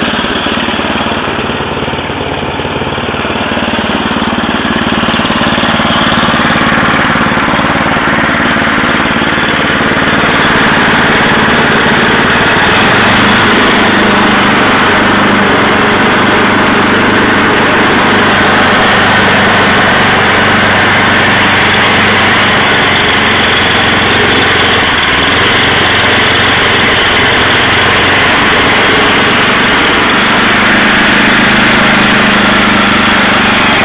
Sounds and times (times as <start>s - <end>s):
Light engine (high frequency): 0.0s - 33.8s.